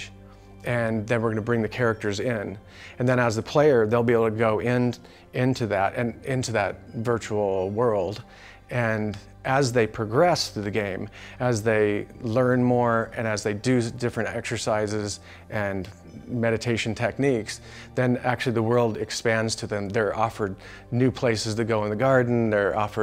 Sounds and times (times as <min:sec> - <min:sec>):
Music: 0:00.0 - 0:23.0
Speech: 0:00.0 - 0:23.0.